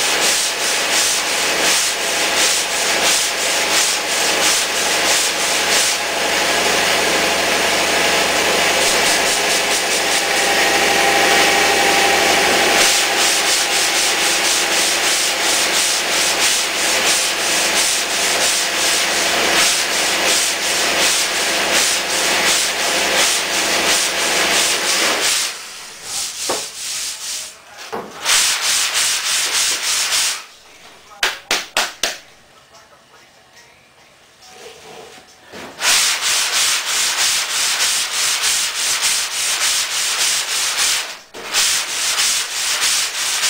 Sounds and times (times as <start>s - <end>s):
Rub: 0.0s - 6.0s, 12.2s - 31.0s, 35.8s - 43.4s
Sanding: 0.0s - 27.5s, 28.2s - 30.5s, 35.8s - 43.4s.